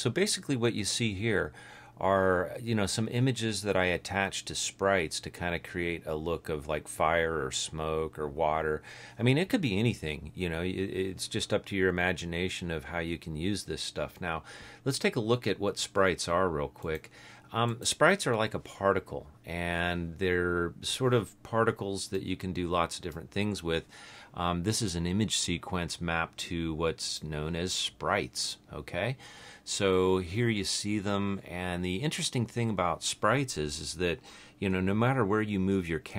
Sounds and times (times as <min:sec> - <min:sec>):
Speech: 0:00.0 - 0:36.1.